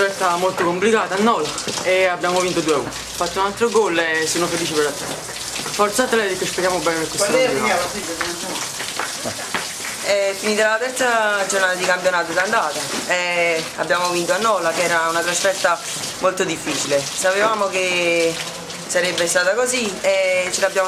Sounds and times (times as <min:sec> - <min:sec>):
Speech: 0:05.8 - 0:08.6, 0:10.1 - 0:20.8.